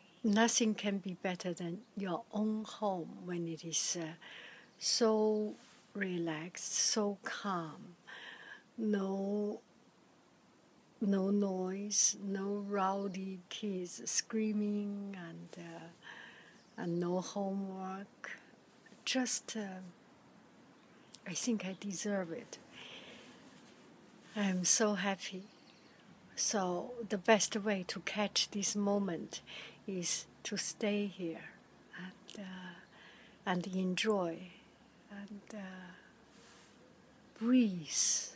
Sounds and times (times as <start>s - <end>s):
Speech: 0.3s - 4.2s, 4.8s - 8.0s, 8.8s - 9.6s, 11.0s - 16.0s, 16.8s - 18.4s, 19.0s - 19.9s, 21.2s - 22.6s, 24.4s - 25.5s, 26.4s - 32.8s, 33.5s - 34.5s, 35.1s - 36.0s, 37.4s - 38.3s.